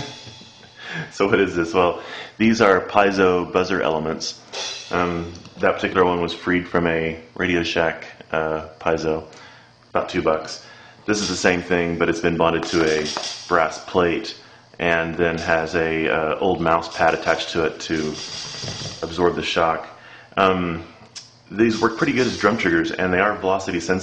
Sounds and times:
Speech: 1.0 - 9.3, 9.9 - 20.9, 21.5 - 24.0.

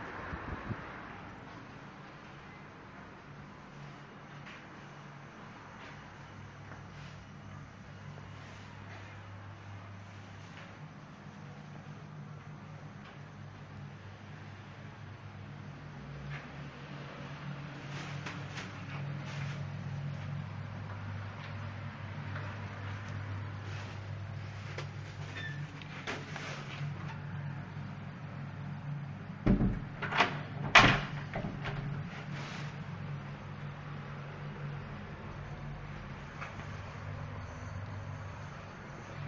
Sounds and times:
Door: 29.5 - 31.9.

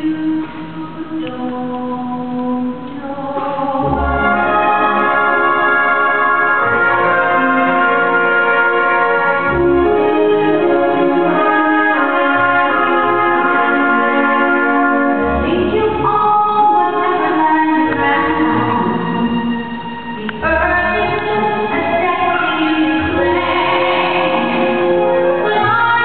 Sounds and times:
Music: 0.0 - 26.0.

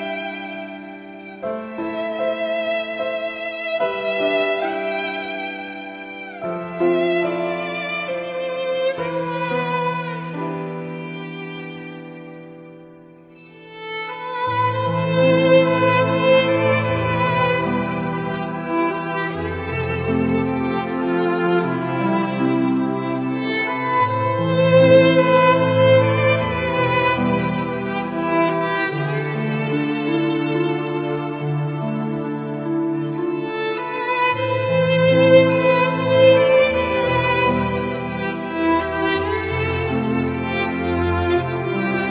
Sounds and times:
Violin, fiddle: 0.0 - 42.1.

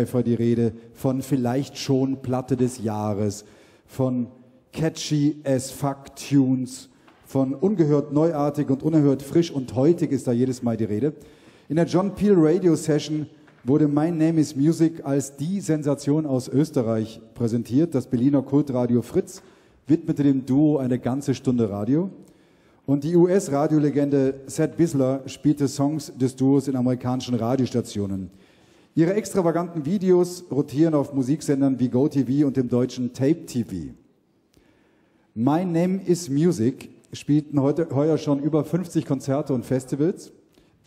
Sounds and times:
Speech: 0.0 - 22.2, 22.9 - 28.3, 29.0 - 34.0, 35.4 - 40.4.

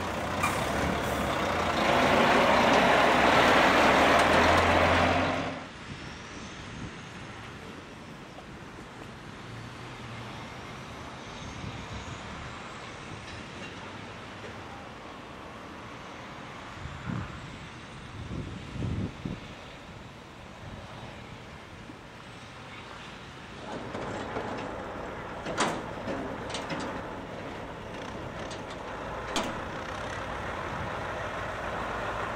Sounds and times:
Vehicle: 0.0 - 32.3.

